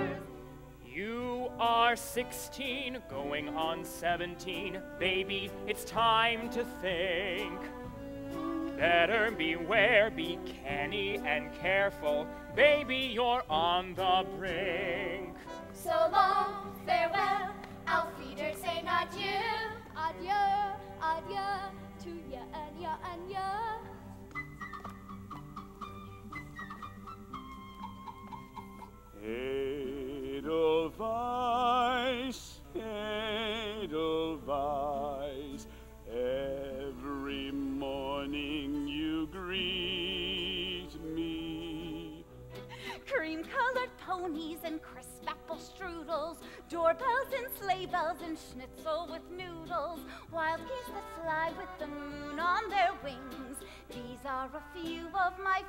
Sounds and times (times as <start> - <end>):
Music: 0.0 - 55.6.